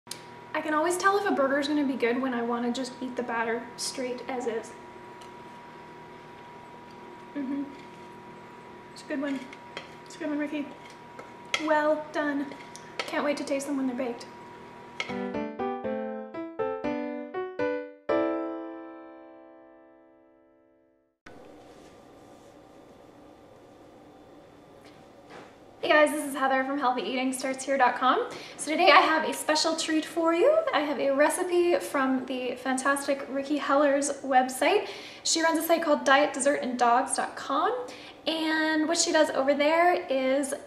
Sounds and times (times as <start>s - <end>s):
Speech: 0.5s - 4.8s, 7.4s - 7.8s, 9.0s - 9.5s, 10.1s - 10.8s, 11.6s - 14.3s, 25.8s - 40.6s.